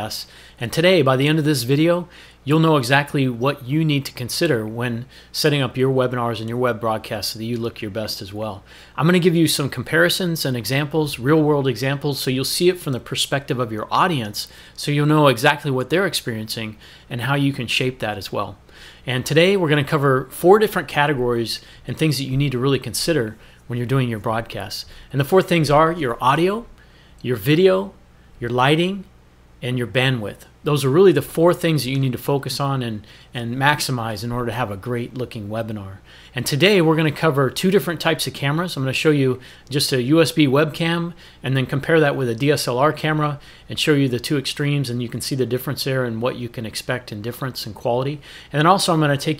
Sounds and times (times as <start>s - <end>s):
Speech: 0.0s - 49.3s.